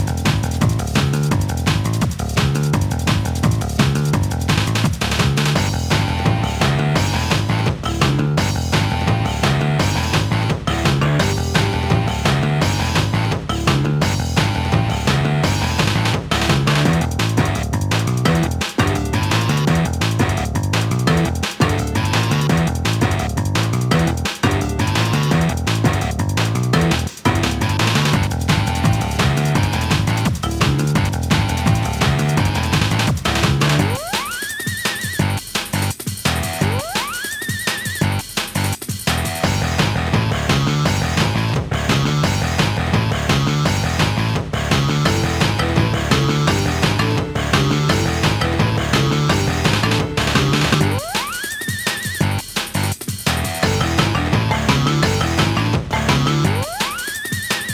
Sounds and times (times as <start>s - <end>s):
Soundtrack music: 0.0s - 37.4s, 38.0s - 57.7s.